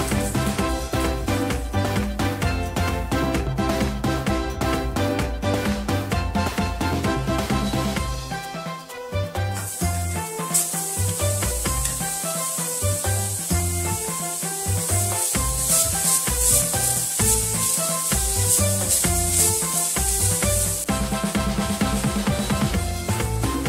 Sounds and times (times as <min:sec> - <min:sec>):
Music: 0:00.0 - 0:23.6.